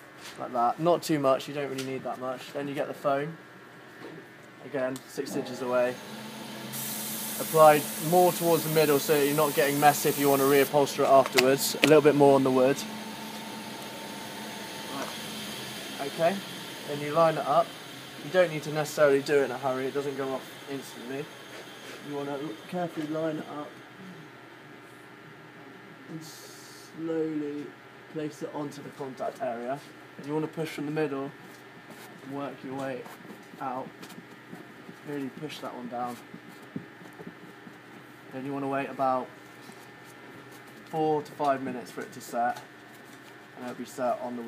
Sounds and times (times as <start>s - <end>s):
Speech: 0.4s - 3.4s, 4.6s - 6.0s, 7.4s - 12.9s, 14.9s - 15.2s, 16.0s - 21.3s, 22.0s - 23.8s, 26.1s - 31.4s, 32.2s - 33.9s, 35.0s - 36.2s, 38.3s - 39.3s, 40.9s - 42.7s, 43.6s - 44.4s.